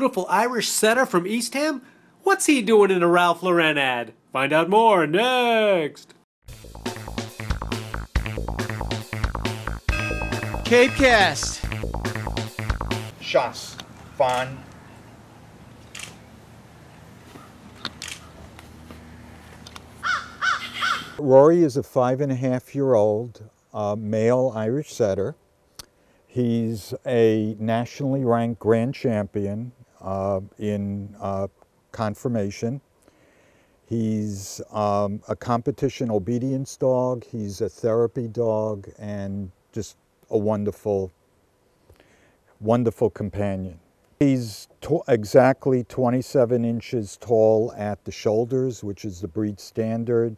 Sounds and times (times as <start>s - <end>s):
Speech: 0.0s - 6.2s, 10.7s - 11.6s, 13.2s - 14.7s, 21.2s - 25.4s, 26.3s - 32.8s, 33.9s - 41.2s, 42.6s - 50.3s.